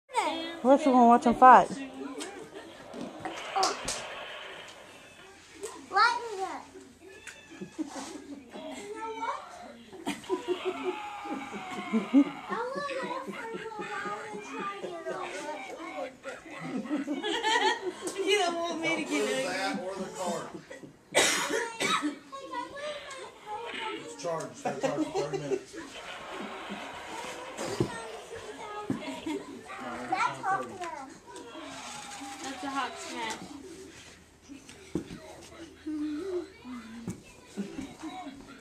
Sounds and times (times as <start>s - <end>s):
Child speech, kid speaking: 0.1s - 2.2s, 5.7s - 6.8s, 8.5s - 9.8s, 12.5s - 16.2s, 21.5s - 24.2s, 27.8s - 31.5s, 35.1s - 38.6s.